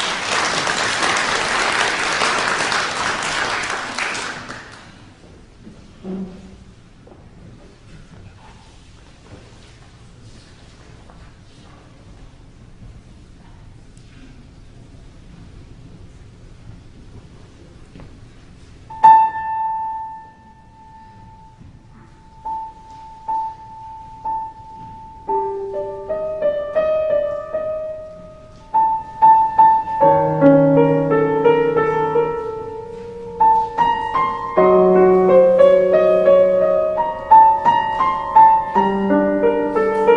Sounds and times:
Music: 18.9s - 40.1s.

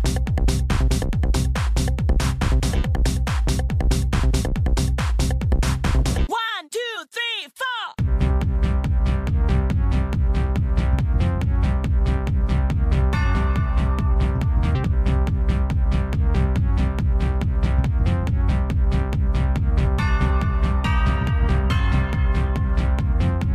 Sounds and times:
Dance music: 0.0s - 23.5s
House music: 0.0s - 23.5s
Techno: 0.0s - 23.5s
Exciting music: 8.0s - 23.5s.

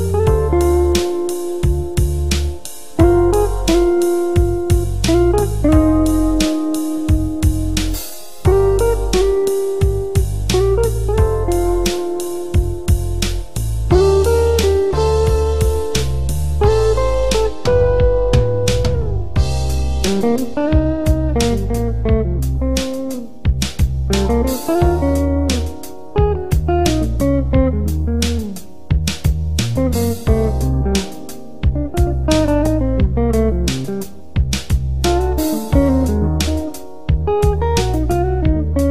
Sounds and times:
Music: 0.0s - 38.9s.

